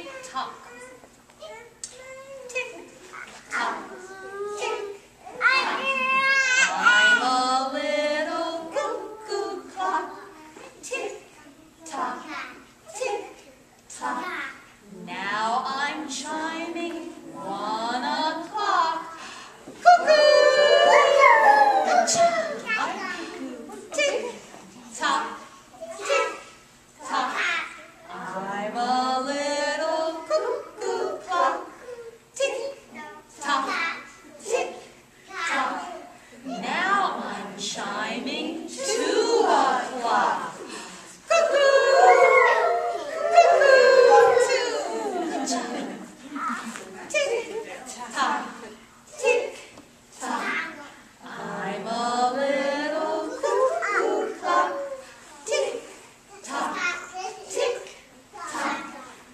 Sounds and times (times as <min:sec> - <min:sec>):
A capella: 0:06.6 - 0:12.3, 0:12.9 - 0:22.7, 0:27.0 - 0:33.8, 0:34.4 - 0:46.1, 0:47.2 - 0:58.9.